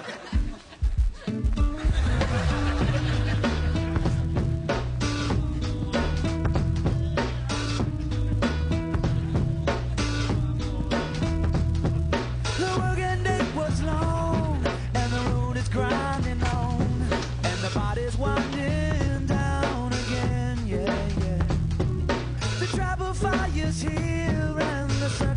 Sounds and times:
Music: 0.0 - 25.3.

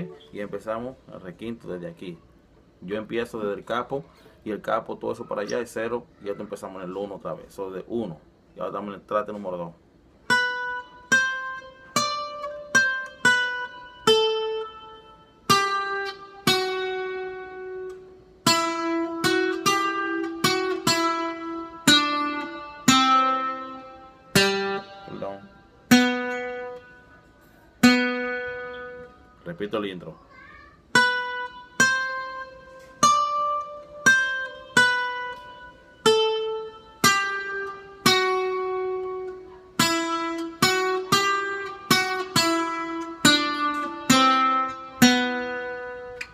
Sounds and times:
Acoustic guitar: 0.0 - 46.3.

